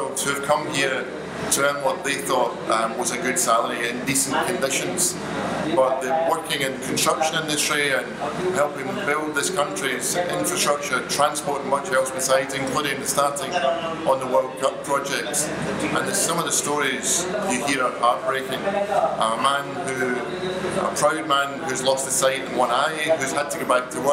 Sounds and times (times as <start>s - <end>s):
Speech: 0.0s - 24.1s.